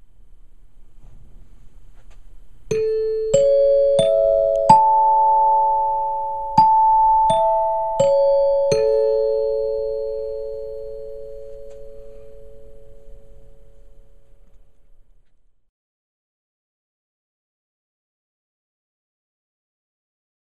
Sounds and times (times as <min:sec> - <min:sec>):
Glockenspiel: 0:02.7 - 0:14.4.